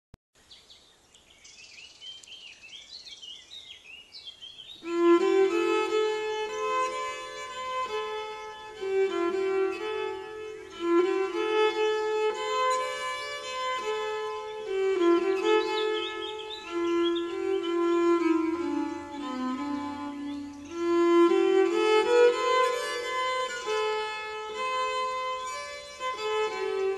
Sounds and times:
Bird vocalization, bird call, bird song: 0.4s - 26.9s
Environmental noise: 0.4s - 26.9s.

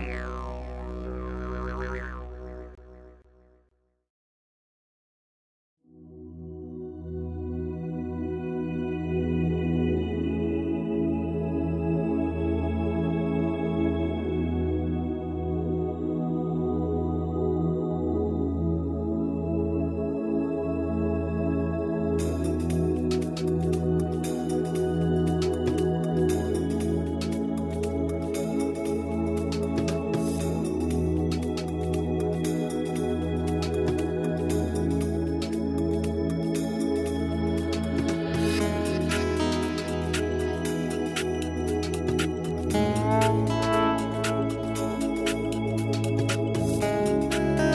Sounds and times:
Happy music: 22.2s - 47.7s.

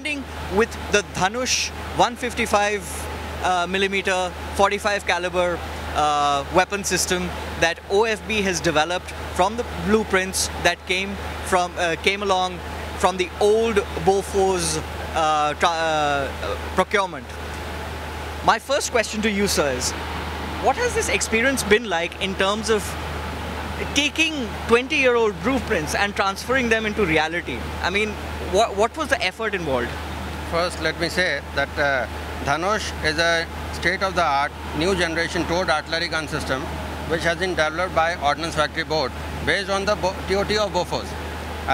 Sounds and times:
Speech: 0.0s - 17.3s, 18.5s - 20.0s, 20.6s - 23.0s, 23.8s - 41.1s.

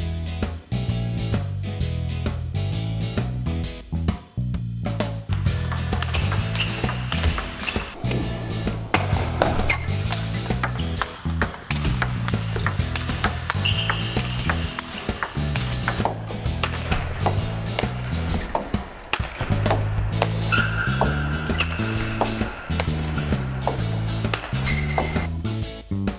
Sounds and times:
Music: 0.0s - 26.1s
Inside, large room or hall: 5.3s - 25.3s.

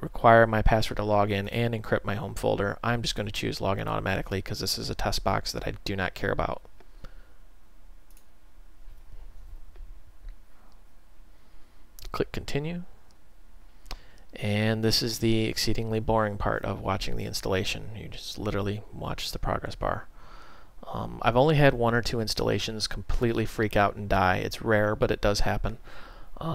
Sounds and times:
Speech: 0.0s - 6.7s, 12.0s - 13.0s, 14.4s - 20.1s, 20.8s - 25.8s.

